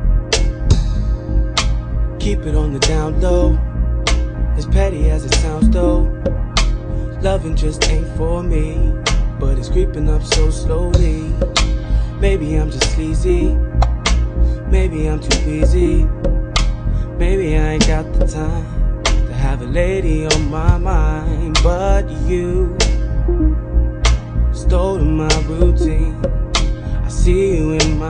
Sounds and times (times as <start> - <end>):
Rhythm and blues: 5.6 - 6.4, 23.3 - 24.2, 25.3 - 26.7.